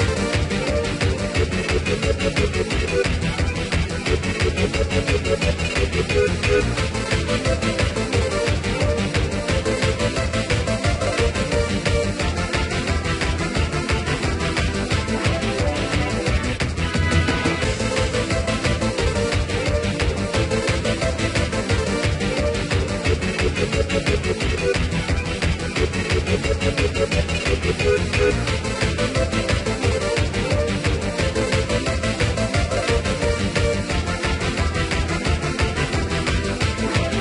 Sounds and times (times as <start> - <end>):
Exciting music: 0.0 - 37.2
Soundtrack music: 0.0 - 37.2.